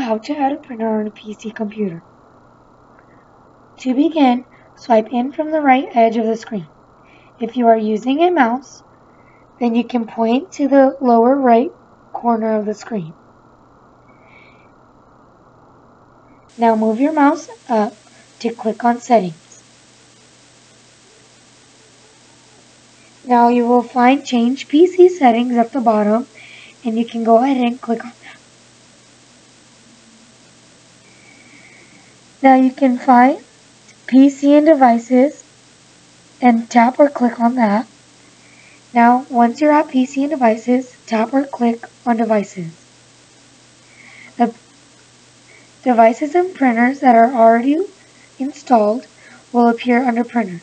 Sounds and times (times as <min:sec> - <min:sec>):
Speech: 0:00.0 - 0:02.0, 0:03.8 - 0:06.7, 0:07.4 - 0:08.8, 0:09.6 - 0:13.2, 0:16.5 - 0:19.6, 0:23.3 - 0:28.4, 0:32.4 - 0:35.4, 0:36.4 - 0:37.9, 0:38.9 - 0:42.8, 0:44.4 - 0:44.6, 0:45.8 - 0:50.6.